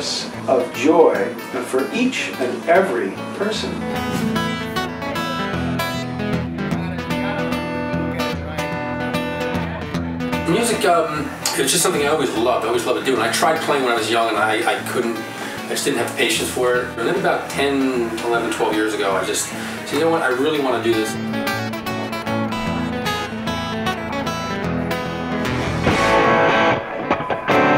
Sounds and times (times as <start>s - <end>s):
Speech: 0.0s - 3.9s, 10.5s - 21.2s
Acoustic guitar: 0.0s - 27.7s
Strum: 0.2s - 27.7s.